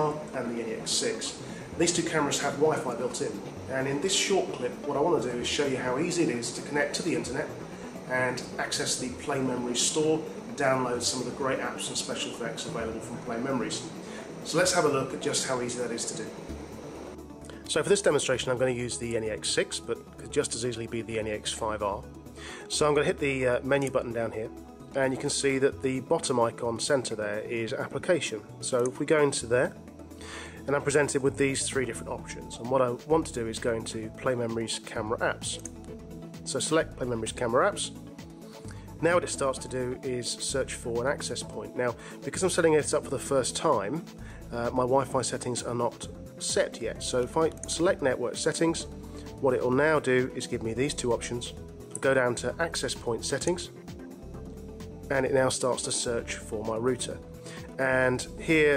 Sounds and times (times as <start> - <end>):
Speech: 0.0 - 16.3, 17.7 - 22.0, 22.7 - 29.8, 30.6 - 35.7, 36.5 - 38.0, 39.0 - 53.7, 55.1 - 57.2, 57.8 - 58.7
Music: 0.0 - 58.7.